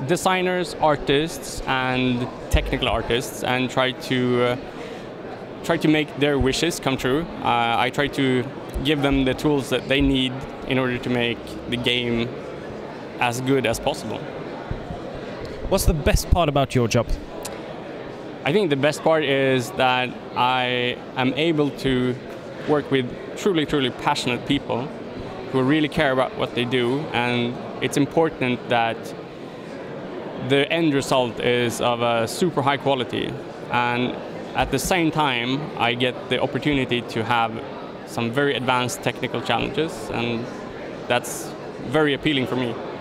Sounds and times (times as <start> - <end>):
Speech: 0.0 - 4.7, 5.6 - 12.4, 13.2 - 14.3, 15.7 - 17.2, 18.4 - 24.9, 25.5 - 29.1, 30.4 - 43.0.